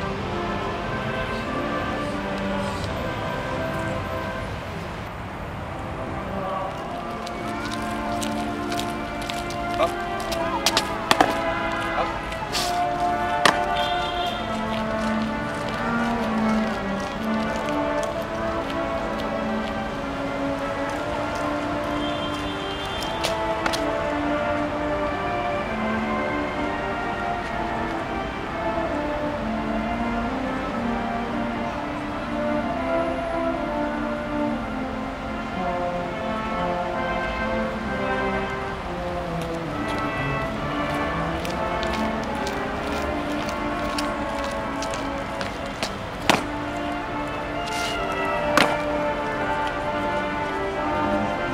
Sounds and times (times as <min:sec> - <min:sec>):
Music: 0:00.0 - 0:51.5
Outside, urban or manmade: 0:00.0 - 0:51.5.